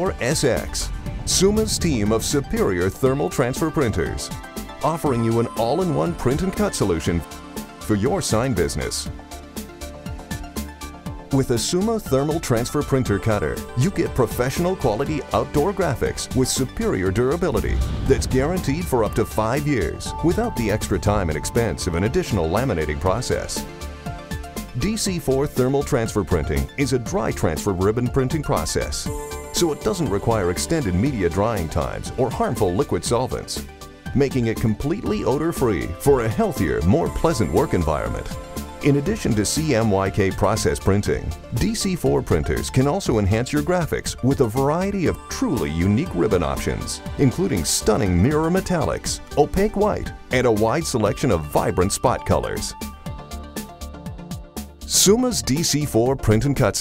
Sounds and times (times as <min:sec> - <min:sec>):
Speech: 0:00.0 - 0:09.2, 0:11.3 - 0:23.7, 0:24.8 - 0:52.8, 0:54.9 - 0:56.8
Music: 0:00.0 - 0:56.8.